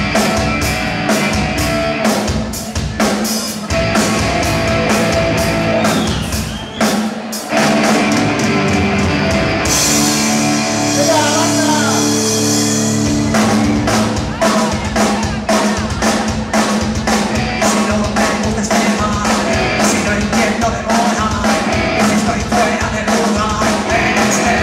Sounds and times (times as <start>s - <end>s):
Music: 0.0s - 24.6s
Speech: 11.0s - 12.2s, 14.1s - 19.1s.